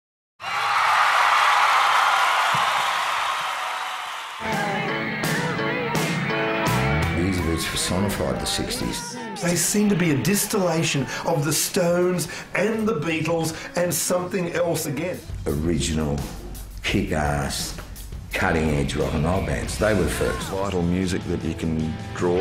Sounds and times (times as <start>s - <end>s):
Music: 4.4s - 22.4s
Speech: 7.2s - 22.4s
Shout: 7.3s - 11.1s.